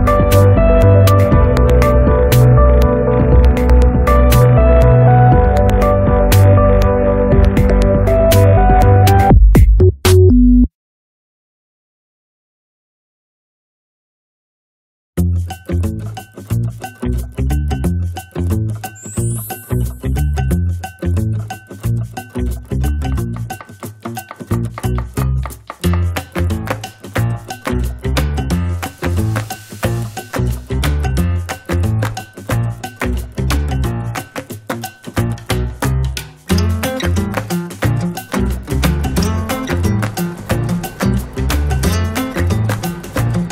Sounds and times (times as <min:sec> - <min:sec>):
Music: 0:00.0 - 0:10.7, 0:15.2 - 0:43.5.